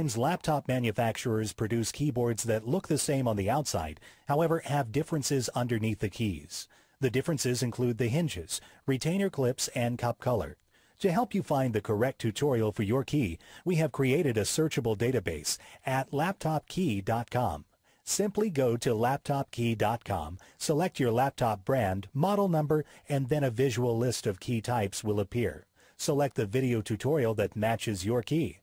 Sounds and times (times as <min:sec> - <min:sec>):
Speech: 0:00.0 - 0:28.6.